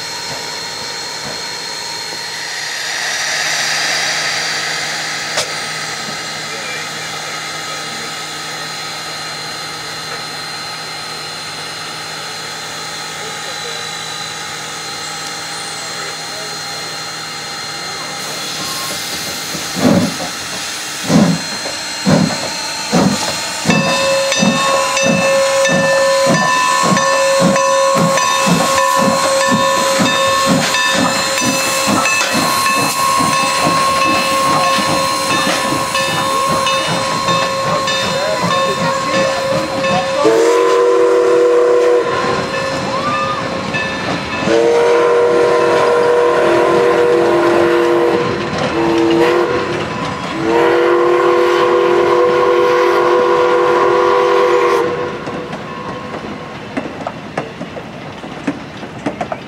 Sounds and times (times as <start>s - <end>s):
Heavy engine (low frequency): 0.0s - 59.4s
Speech: 13.1s - 13.9s, 15.8s - 17.0s, 37.7s - 40.3s.